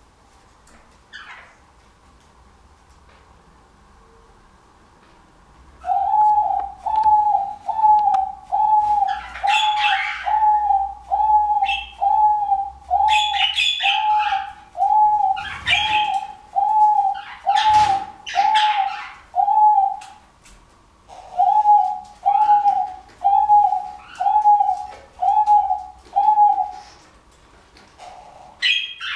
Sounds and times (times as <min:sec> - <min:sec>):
Bird vocalization, bird call, bird song: 0:01.1 - 0:01.6, 0:05.8 - 0:20.2, 0:21.1 - 0:26.9, 0:28.0 - 0:29.1.